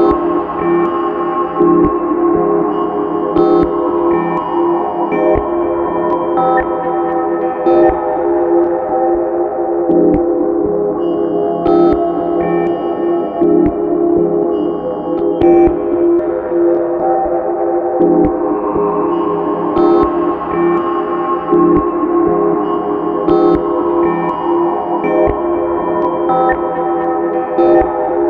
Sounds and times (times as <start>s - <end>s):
Music: 0.0s - 28.3s.